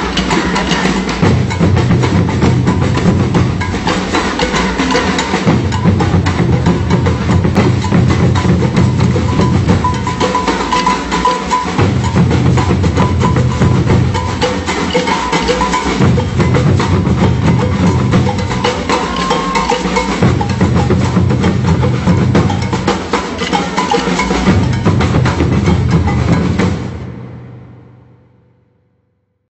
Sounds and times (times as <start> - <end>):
Music: 0.0 - 29.5.